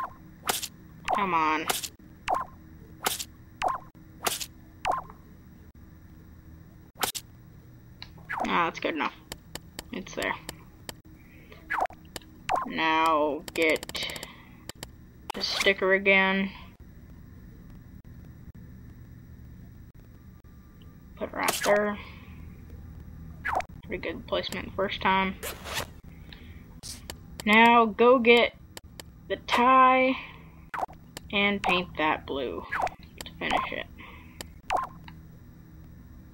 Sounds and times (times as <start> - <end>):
Speech: 1.1 - 1.7, 8.5 - 9.2, 9.9 - 10.5, 12.7 - 14.3, 15.3 - 16.7, 21.2 - 22.1, 23.9 - 25.4, 27.4 - 28.6, 29.3 - 30.3, 31.3 - 32.7, 33.3 - 33.9.